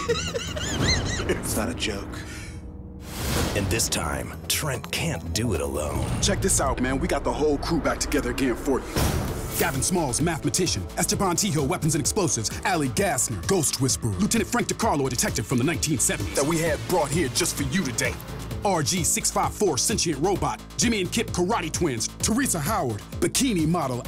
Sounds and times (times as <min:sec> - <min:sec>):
Music: 0:00.0 - 0:24.0
Speech: 0:03.6 - 0:08.8, 0:09.6 - 0:24.0.